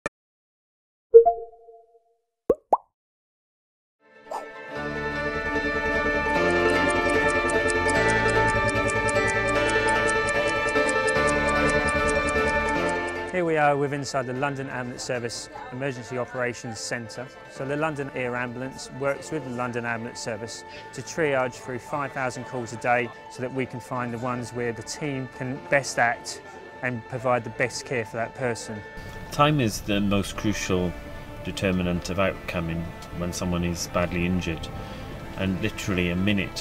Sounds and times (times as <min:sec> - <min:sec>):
Plop: 0:02.5 - 0:02.9
Music: 0:04.0 - 0:36.6.